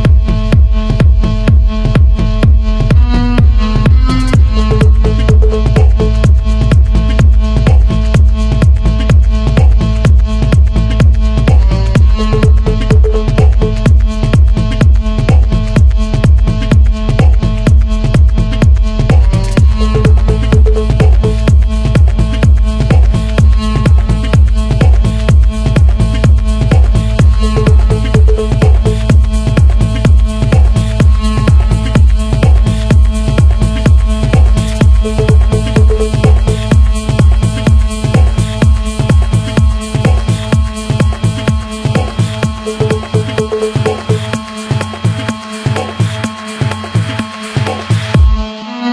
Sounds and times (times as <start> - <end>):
House music: 0.0 - 48.9.